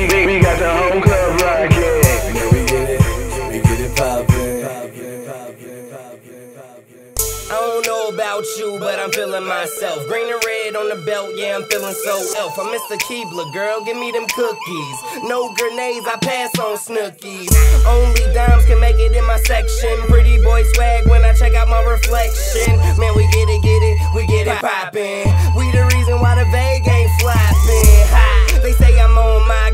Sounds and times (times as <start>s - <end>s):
Music: 0.0s - 4.8s, 7.2s - 29.7s.